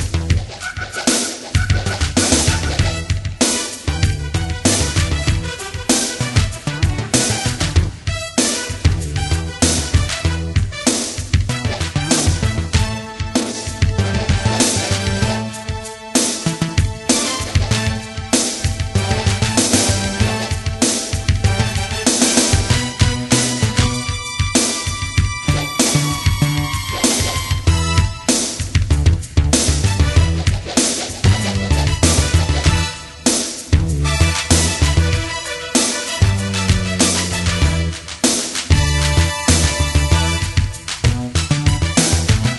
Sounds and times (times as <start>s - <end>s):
Music: 0.0s - 42.5s.